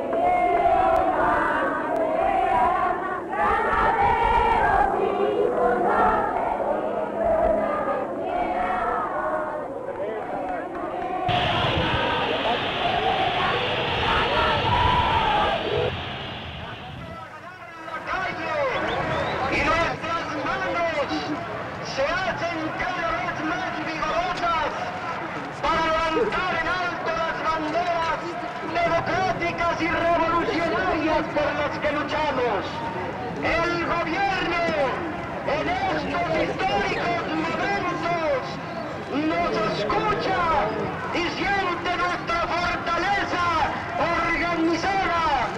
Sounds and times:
Speech: 16.6 - 45.5.

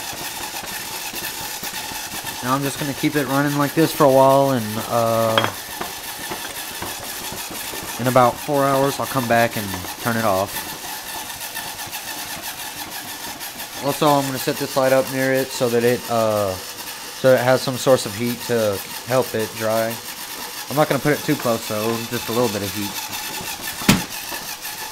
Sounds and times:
Speech: 2.4 - 5.6, 8.0 - 10.5, 13.8 - 16.6, 17.2 - 20.0, 20.7 - 23.0.

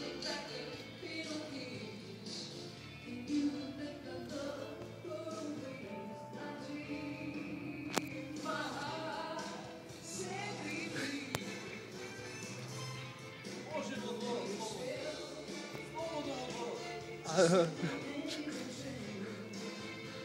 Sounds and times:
Music: 0.0 - 20.2.

